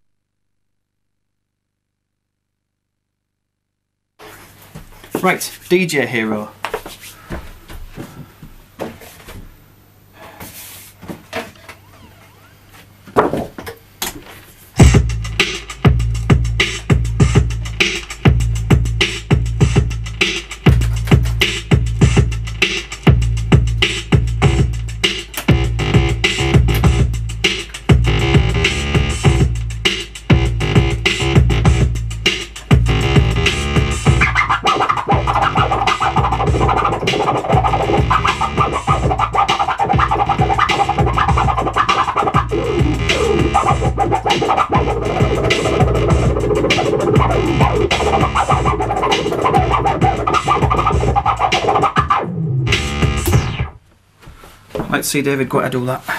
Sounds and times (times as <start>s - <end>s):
Scratching (performance technique): 14.5s - 53.8s.